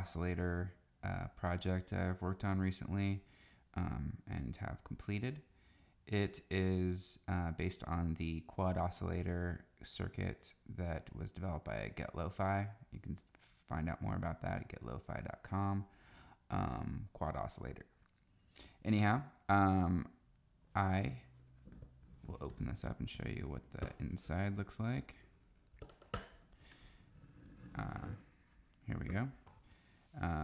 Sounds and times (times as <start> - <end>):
Speech: 0.0 - 5.5, 6.1 - 15.9, 16.5 - 18.0, 18.8 - 21.3, 22.2 - 25.3, 27.7 - 29.4, 30.2 - 30.4.